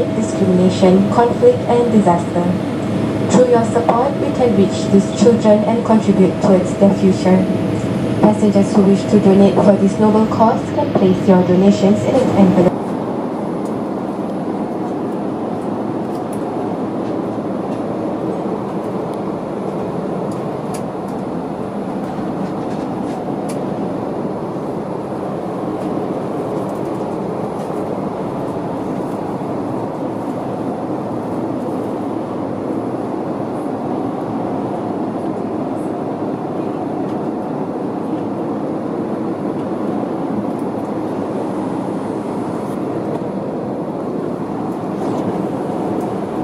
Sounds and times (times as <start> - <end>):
Fixed-wing aircraft, airplane: 0.0 - 46.4.